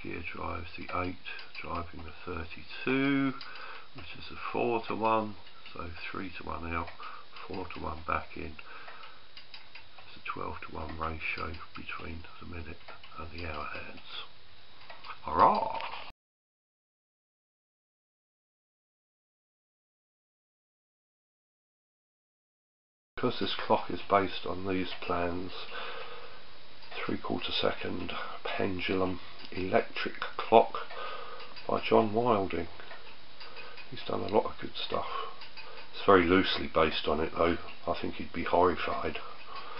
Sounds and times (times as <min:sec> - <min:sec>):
Speech: 0:00.0 - 0:08.6, 0:10.1 - 0:14.3, 0:15.1 - 0:16.0, 0:23.2 - 0:25.7, 0:26.9 - 0:30.9, 0:31.6 - 0:32.7, 0:33.9 - 0:35.4, 0:36.0 - 0:39.3
Clock: 0:00.0 - 0:16.1, 0:23.2 - 0:39.7.